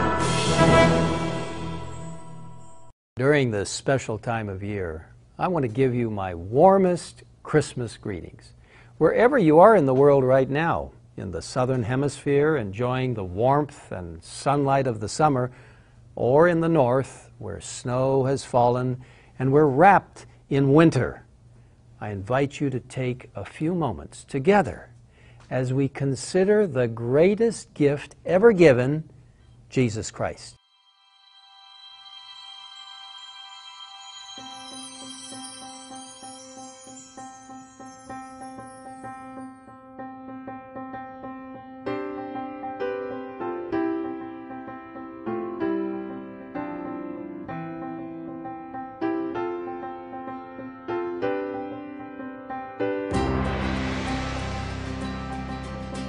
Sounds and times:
Sad music: 0:00.0 - 0:03.0, 0:30.6 - 0:56.0
Speech: 0:03.2 - 0:15.6, 0:16.2 - 0:21.3, 0:22.0 - 0:24.9, 0:25.5 - 0:29.1, 0:29.7 - 0:30.6.

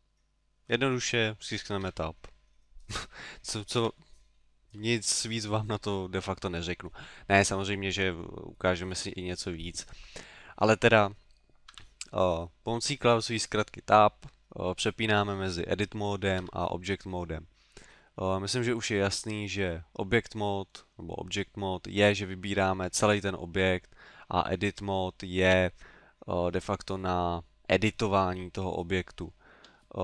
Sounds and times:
Speech: 0:00.7 - 0:02.3, 0:03.4 - 0:04.0, 0:04.8 - 0:09.9, 0:10.6 - 0:11.2, 0:12.0 - 0:17.5, 0:18.2 - 0:30.0.

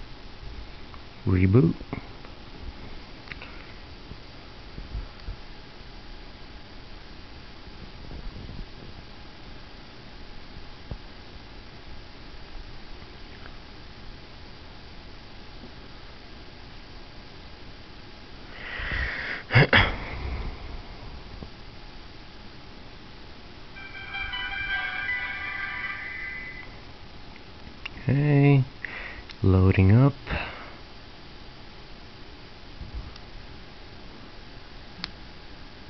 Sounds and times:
Music: 0:23.8 - 0:26.9
Inside, small room: 0:23.8 - 0:28.0.

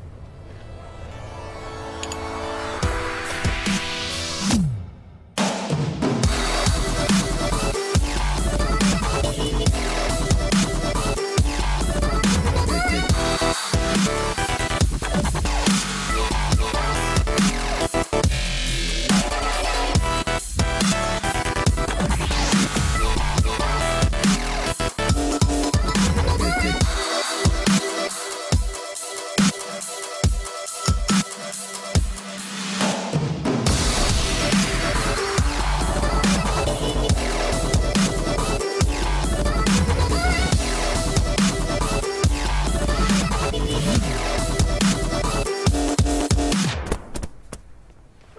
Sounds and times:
Dubstep: 0:06.2 - 0:46.8.

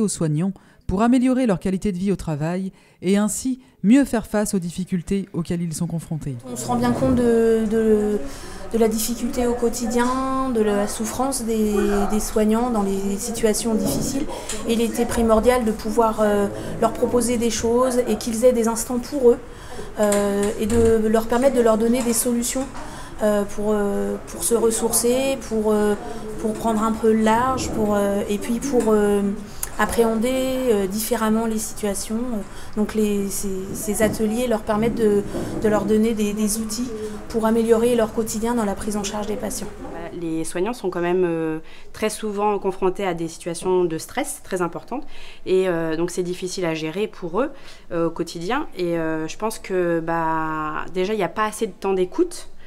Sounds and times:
Speech: 0:00.0 - 0:52.5.

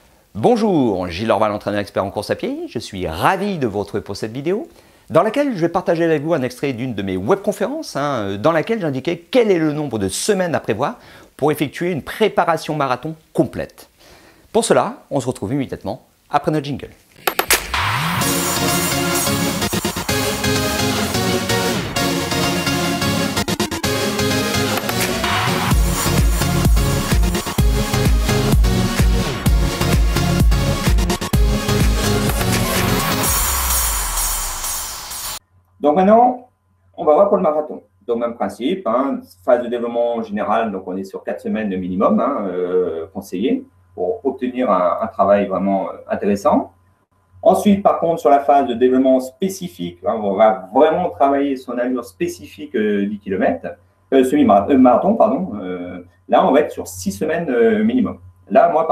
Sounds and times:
Speech: 0:00.4 - 0:13.9, 0:14.5 - 0:17.0, 0:35.8 - 0:46.7, 0:47.4 - 0:58.9
Music: 0:17.5 - 0:35.4.

